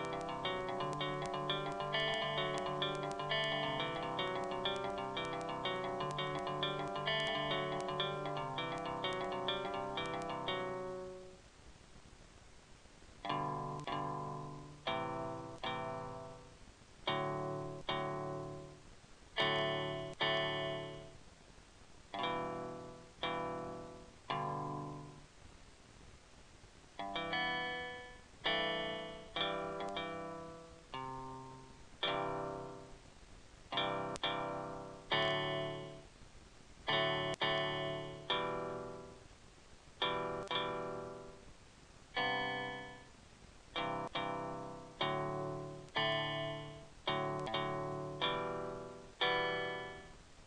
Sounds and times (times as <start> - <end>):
Guitar: 0.0 - 11.5, 13.2 - 21.4, 22.1 - 25.4, 26.9 - 36.2, 36.8 - 50.4.